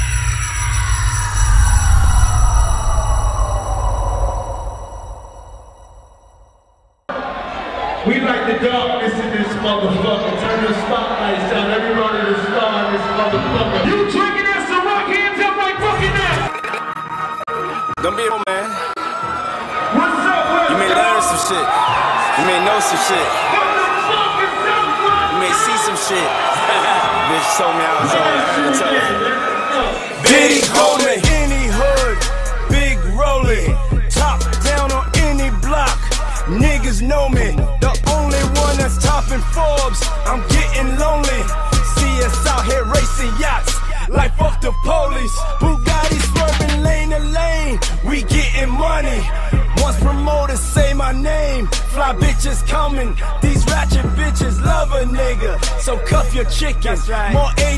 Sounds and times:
Music: 0.0 - 6.4, 11.2 - 57.7
Speech: 8.0 - 16.5, 20.0 - 21.7, 22.4 - 30.0.

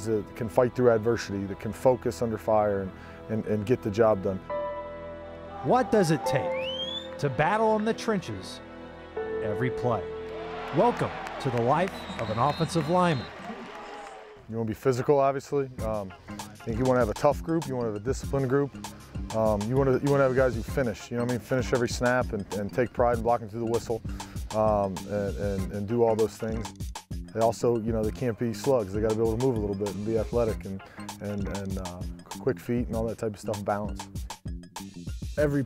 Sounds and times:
Speech: 0.0 - 4.4, 5.7 - 6.5, 7.2 - 8.6, 9.4 - 10.0, 10.8 - 13.3, 14.5 - 18.7, 19.3 - 26.7, 27.4 - 34.0, 35.4 - 35.6
Music: 0.0 - 13.4, 14.5 - 35.6.

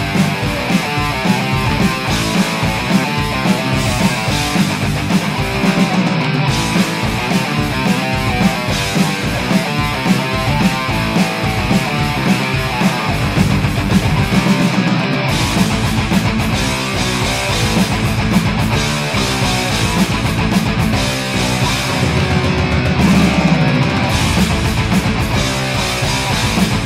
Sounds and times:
Heavy metal: 0.0 - 26.8.

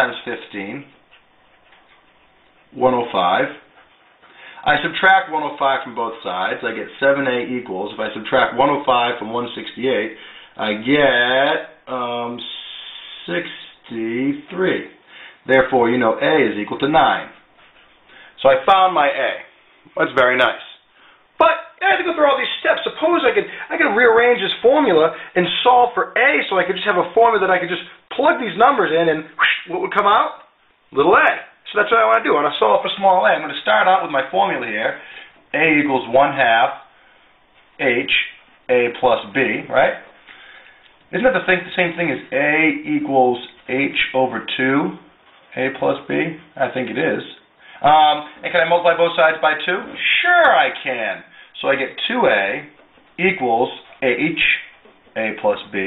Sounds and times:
Speech: 0.0 - 1.0, 2.7 - 3.7, 4.6 - 17.4, 18.4 - 36.9, 37.8 - 40.1, 41.1 - 55.8
Inside, small room: 0.0 - 55.8.

